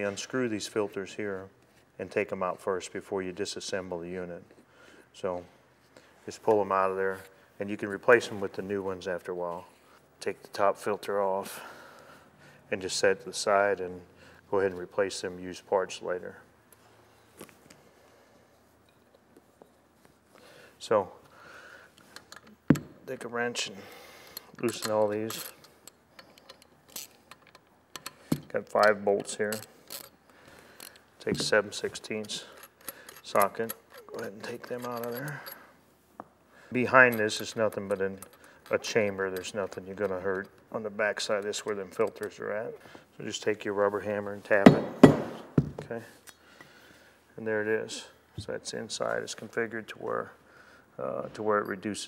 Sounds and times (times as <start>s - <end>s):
Speech: 0.0s - 4.5s, 5.2s - 5.5s, 6.3s - 11.6s, 12.7s - 16.4s, 23.1s - 23.8s, 24.6s - 25.4s, 28.5s - 29.6s, 31.2s - 32.5s, 33.2s - 35.4s, 36.7s - 44.9s, 47.4s - 50.4s, 51.0s - 52.0s.